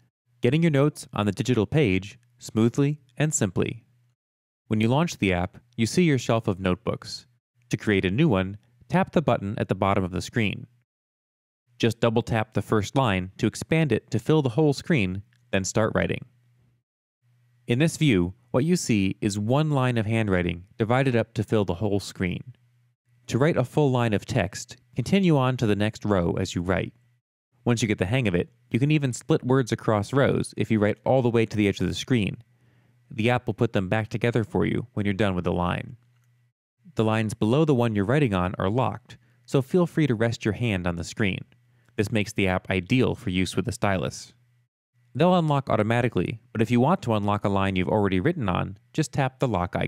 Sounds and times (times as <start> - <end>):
Speech: 0.0 - 3.9, 4.7 - 10.7, 11.8 - 16.3, 17.7 - 22.6, 23.3 - 27.0, 27.6 - 32.4, 33.1 - 36.0, 36.9 - 44.4, 45.2 - 49.8.